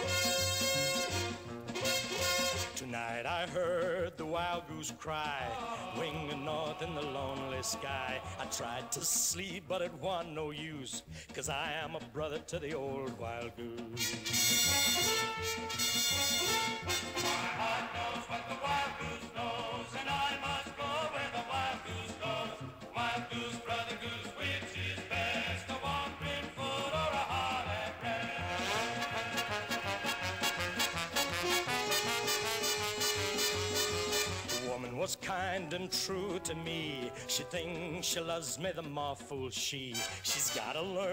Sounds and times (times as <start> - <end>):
Music: 0.0 - 41.1.